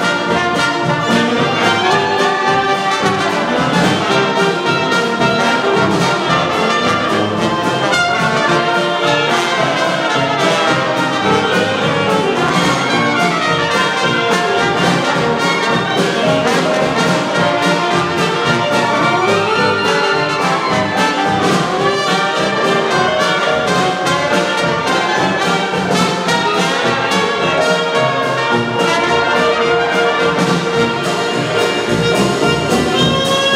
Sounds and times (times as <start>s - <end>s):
Music: 0.0s - 33.5s.